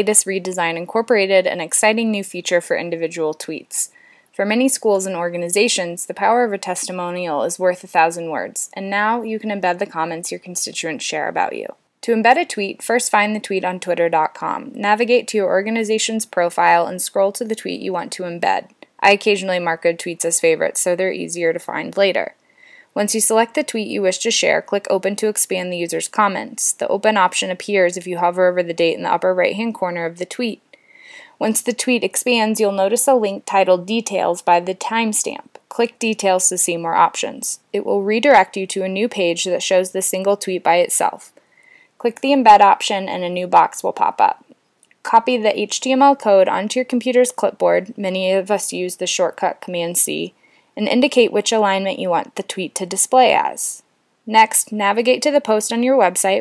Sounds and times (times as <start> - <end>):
Speech: 0.0 - 22.4, 23.0 - 30.6, 31.4 - 41.3, 42.0 - 44.5, 45.1 - 56.4.